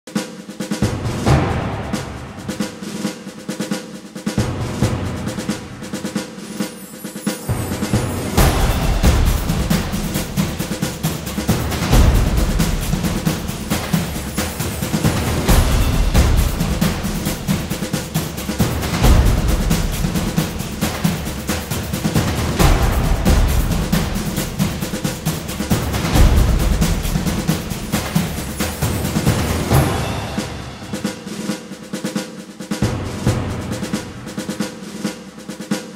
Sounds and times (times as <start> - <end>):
Drum kit: 0.0 - 35.9
Rimshot: 0.1 - 6.3, 7.5 - 35.9
Drum roll: 0.1 - 35.9
Bass drum: 0.8 - 2.6, 7.5 - 31.1.